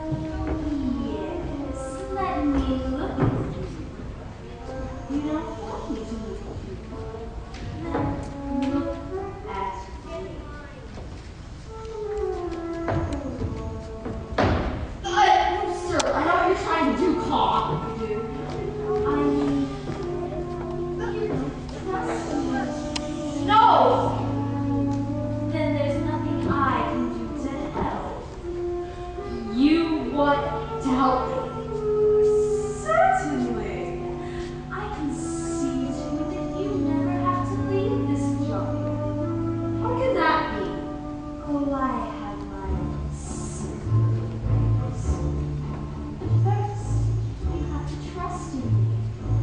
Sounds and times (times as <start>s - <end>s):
Music: 0.0s - 49.4s
Speech: 15.0s - 19.7s, 29.4s - 31.5s, 32.4s - 34.0s, 34.7s - 38.7s, 46.4s - 48.8s.